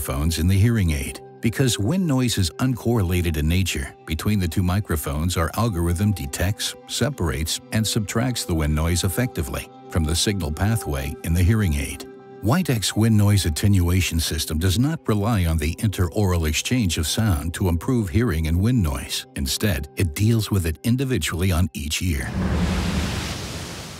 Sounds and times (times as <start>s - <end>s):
Speech: 0.0s - 22.3s
Music: 0.0s - 22.7s.